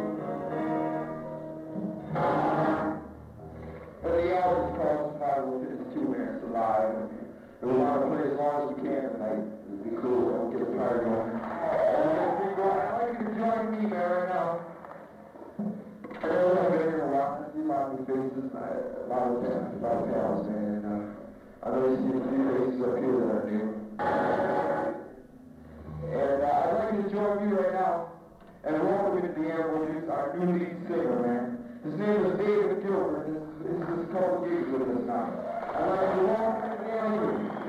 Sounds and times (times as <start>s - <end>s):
Speech: 4.0s - 14.7s, 16.1s - 23.9s, 25.8s - 37.6s.